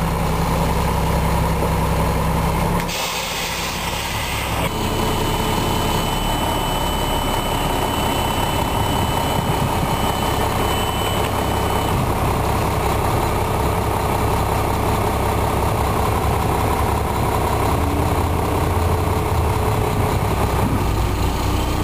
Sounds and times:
Truck: 0:00.0 - 0:21.8.

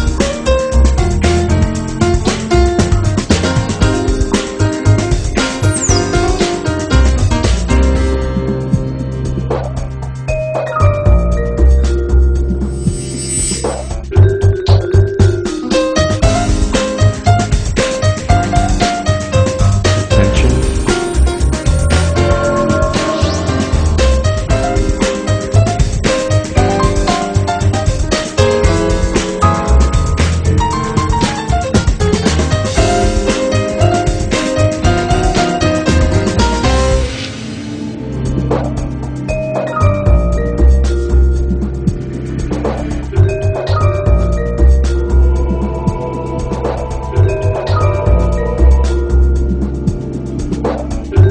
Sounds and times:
Music: 0:00.0 - 0:51.3.

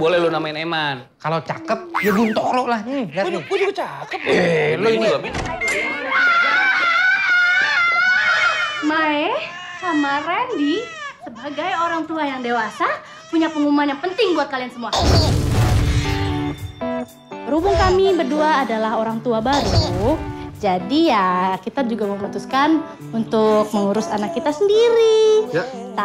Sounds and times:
Screaming: 0:06.0 - 0:10.2.

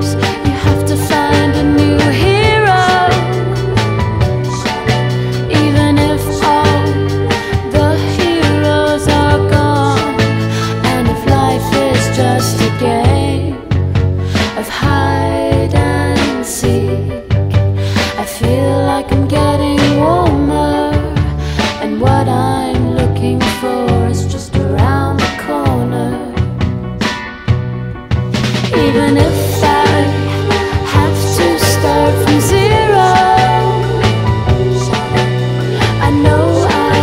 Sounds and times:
Soul music: 0:00.0 - 0:37.0.

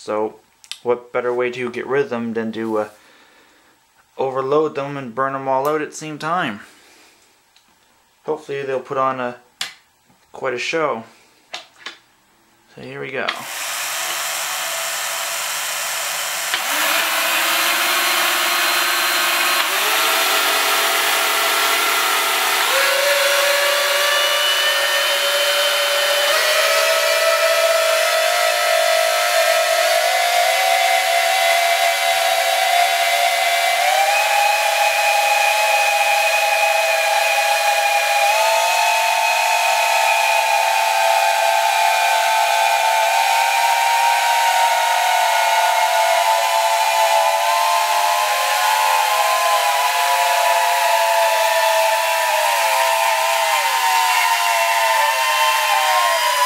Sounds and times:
Inside, small room: 0:00.0 - 0:56.4.

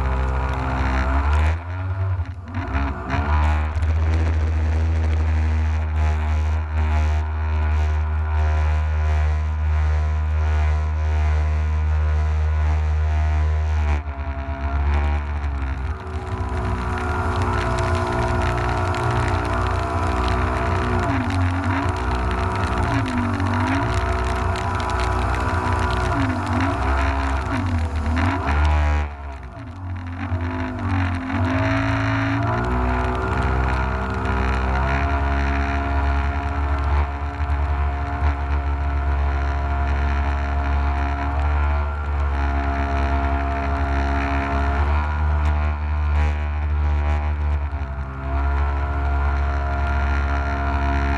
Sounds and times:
Vehicle: 0:00.0 - 0:51.1.

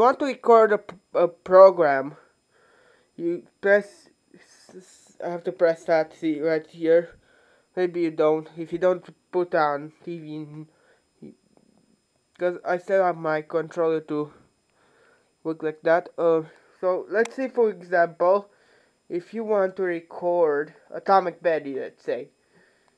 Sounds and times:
Speech: 0:00.0 - 0:02.3, 0:03.2 - 0:07.2, 0:07.8 - 0:11.4, 0:12.4 - 0:14.4, 0:15.4 - 0:18.5, 0:19.1 - 0:22.3.

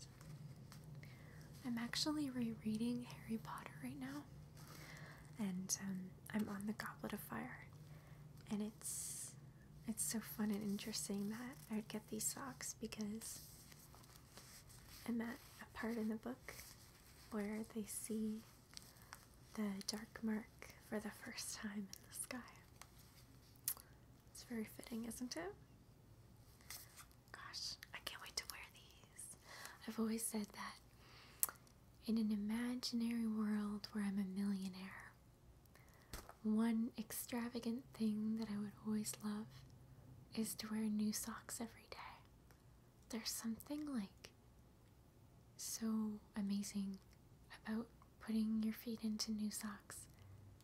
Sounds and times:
Whispering: 0:01.5 - 0:04.3, 0:05.2 - 0:07.8, 0:08.4 - 0:13.7, 0:14.9 - 0:18.6, 0:19.5 - 0:22.8, 0:24.4 - 0:25.6, 0:27.3 - 0:30.9, 0:32.0 - 0:35.2, 0:36.4 - 0:39.7, 0:40.3 - 0:42.3, 0:43.1 - 0:44.3, 0:45.6 - 0:50.2.

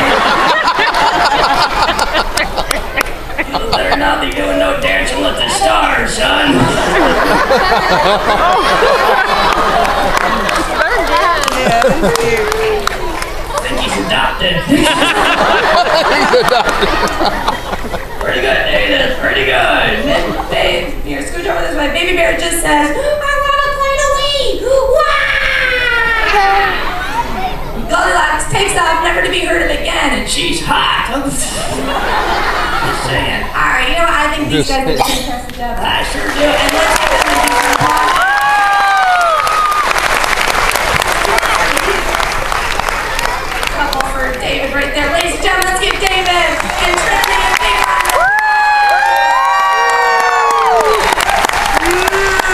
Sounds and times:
Inside, large room or hall: 0:00.0 - 0:52.5.

